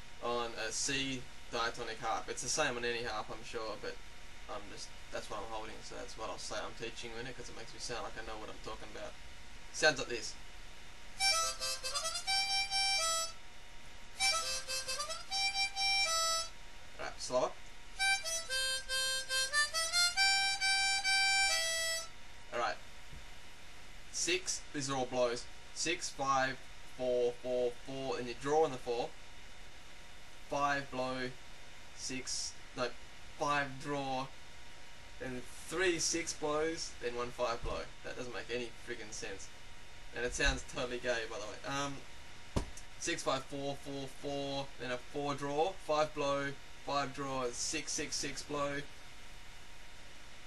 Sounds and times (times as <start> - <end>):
Speech: 0.2 - 10.4, 17.0 - 17.6, 22.5 - 22.8, 24.1 - 29.2, 30.5 - 31.4, 32.0 - 34.4, 35.2 - 39.5, 40.1 - 42.1, 43.0 - 48.9
Music: 11.2 - 13.4, 14.2 - 16.6, 18.0 - 22.2.